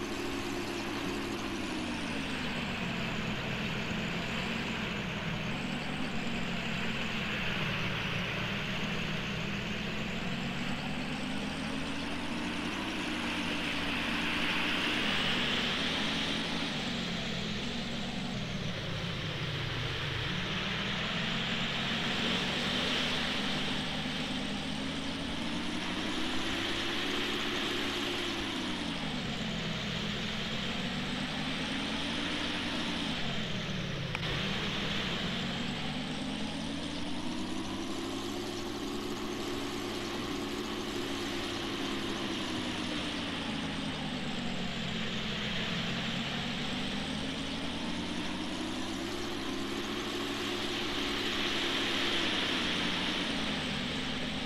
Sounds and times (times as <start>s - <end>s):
Ocean: 0.0s - 36.2s, 47.3s - 54.4s
Vehicle: 0.0s - 54.4s.